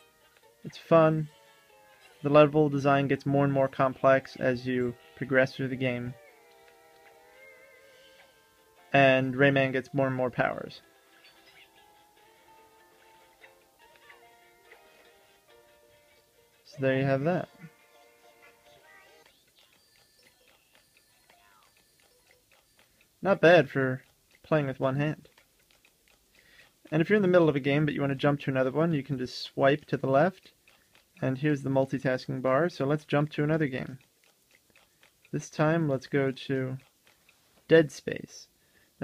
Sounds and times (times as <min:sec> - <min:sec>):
Inside, small room: 0:00.0 - 0:39.0
Speech: 0:00.7 - 0:01.3, 0:02.3 - 0:06.2, 0:09.0 - 0:10.8, 0:16.7 - 0:17.6, 0:23.2 - 0:25.2, 0:26.9 - 0:30.5, 0:31.2 - 0:34.0, 0:35.4 - 0:36.8, 0:37.7 - 0:39.0.